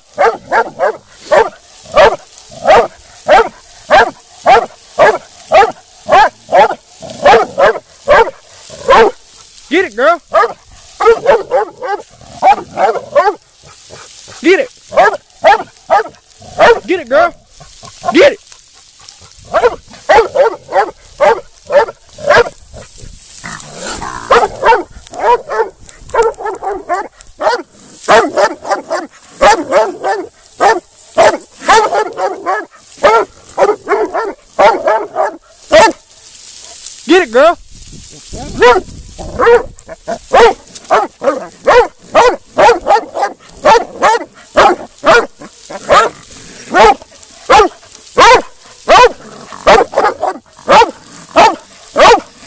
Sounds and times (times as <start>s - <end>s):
Outside, rural or natural: 0.0s - 52.4s
Dog: 0.1s - 9.2s, 10.3s - 16.9s, 17.6s - 36.9s, 38.3s - 52.4s.